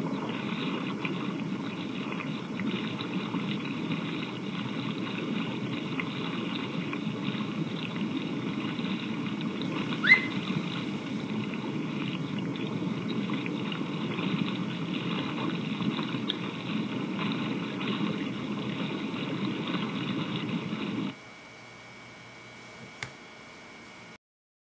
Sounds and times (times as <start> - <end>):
Boat, Water vehicle: 0.0 - 21.2.